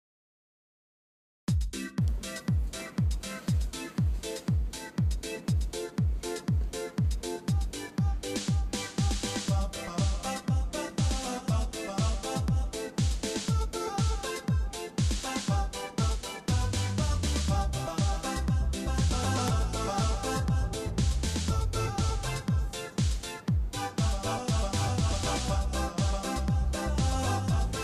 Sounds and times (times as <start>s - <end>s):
Music: 1.5s - 27.8s.